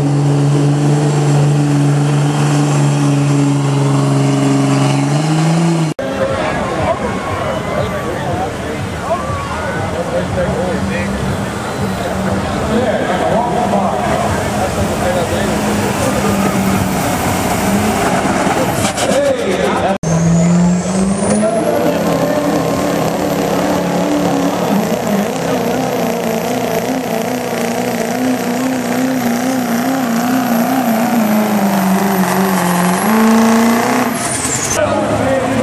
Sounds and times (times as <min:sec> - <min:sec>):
Truck: 0:00.0 - 0:35.6
Speech: 0:06.0 - 0:16.8, 0:18.6 - 0:20.5, 0:21.2 - 0:22.6, 0:34.8 - 0:35.6.